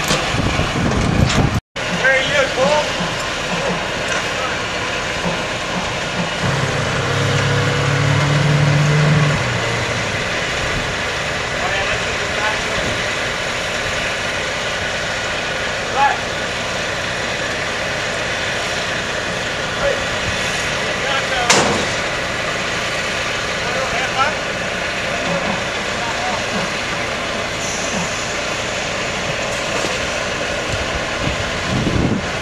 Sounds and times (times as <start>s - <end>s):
Motorboat, speedboat: 0.0s - 32.4s
Speech: 2.0s - 3.0s, 11.6s - 13.0s, 15.9s - 16.3s, 19.8s - 20.1s, 20.8s - 21.7s, 23.6s - 24.5s, 25.1s - 26.6s.